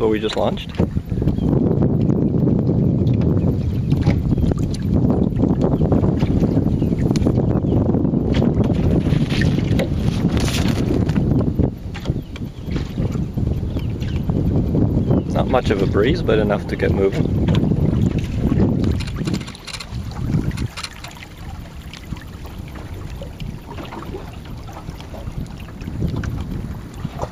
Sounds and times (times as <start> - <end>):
Speech: 0.0 - 0.8, 15.3 - 17.2.